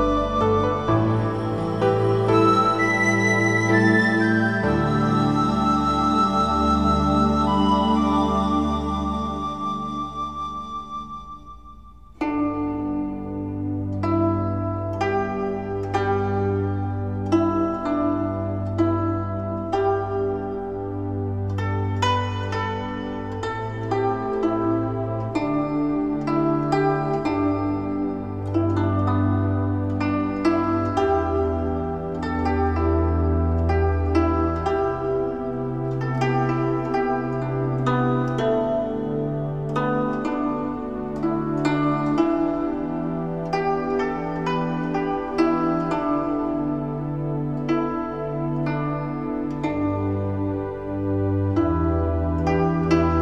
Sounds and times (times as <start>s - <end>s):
Music: 0.0s - 53.2s.